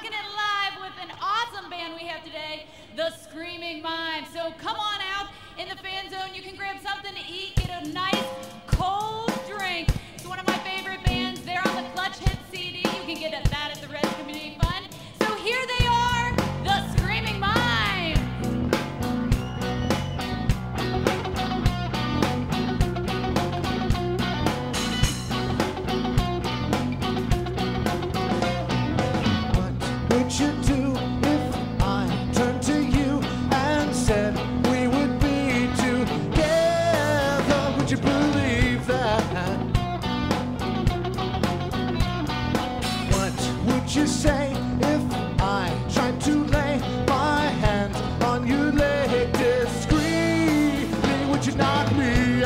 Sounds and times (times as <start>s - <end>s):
Ska: 7.6s - 52.4s.